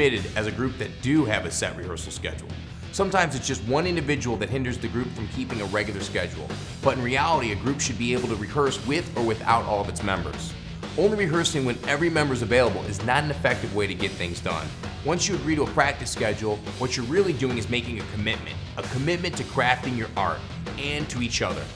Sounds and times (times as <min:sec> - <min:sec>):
Music: 0:00.0 - 0:21.7
Speech: 0:00.0 - 0:21.7.